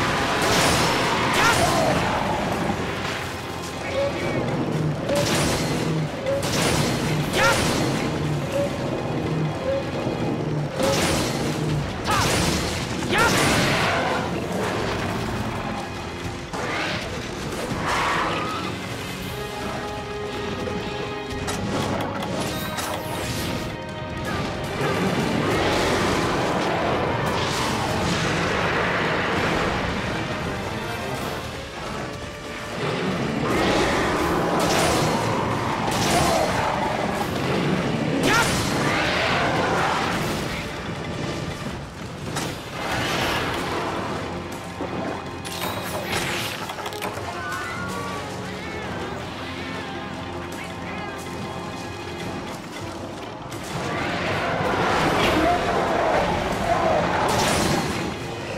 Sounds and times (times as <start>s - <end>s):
Music: 0.0s - 58.5s.